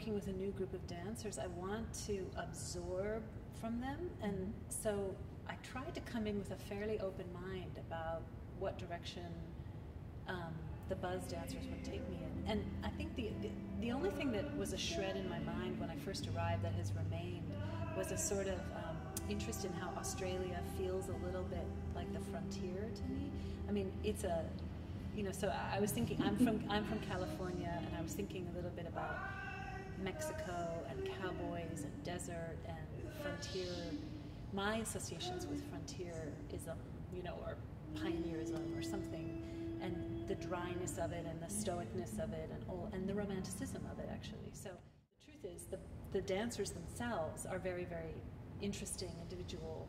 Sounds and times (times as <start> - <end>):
Music: 0.0 - 7.8, 10.3 - 45.0
Speech: 0.0 - 9.6, 10.3 - 24.6, 25.2 - 49.8.